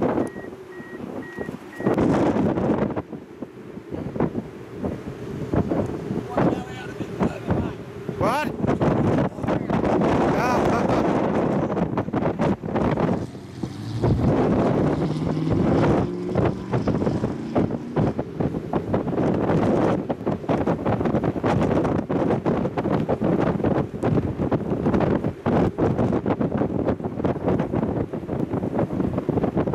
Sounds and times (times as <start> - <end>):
Wind: 0.0 - 29.7.